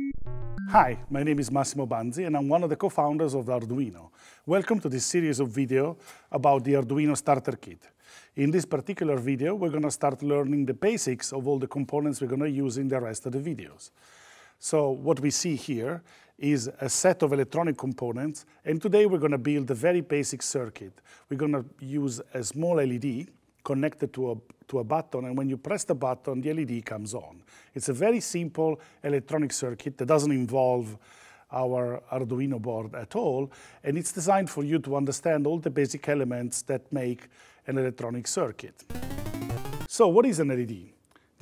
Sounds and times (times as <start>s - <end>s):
Speech: 0.7s - 13.9s, 14.6s - 38.9s, 39.9s - 41.0s.